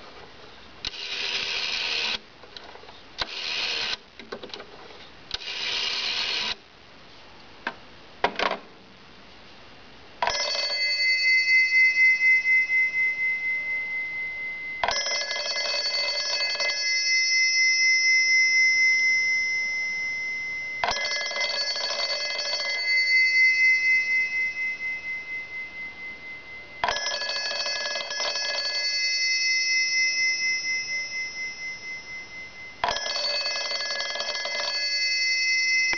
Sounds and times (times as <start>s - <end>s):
Telephone bell ringing: 1.0s - 2.2s, 10.2s - 35.9s.